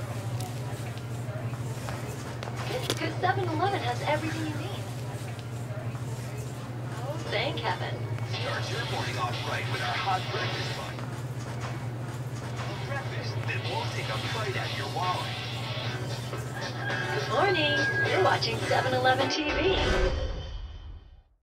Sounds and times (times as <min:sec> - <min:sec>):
Speech: 0:00.1 - 0:11.0, 0:17.3 - 0:19.7
Music: 0:12.6 - 0:21.4.